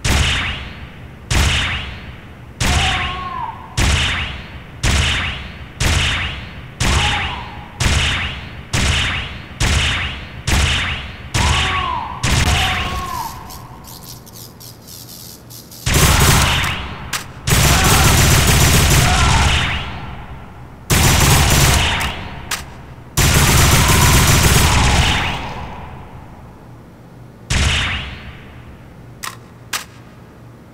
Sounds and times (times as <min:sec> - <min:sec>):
Sound effect: 0:00.0 - 0:03.2, 0:03.8 - 0:17.3, 0:27.5 - 0:28.5.